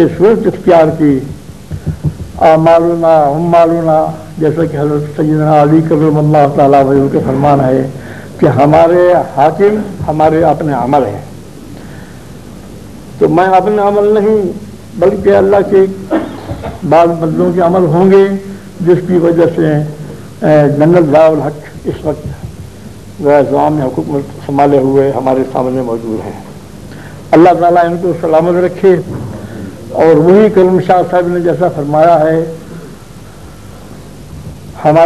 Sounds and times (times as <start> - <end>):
Male speech, man speaking: 0.0 - 1.3, 2.4 - 11.3, 13.2 - 16.1, 16.8 - 22.4, 23.2 - 26.5, 27.3 - 29.1, 29.9 - 32.6, 34.8 - 35.0.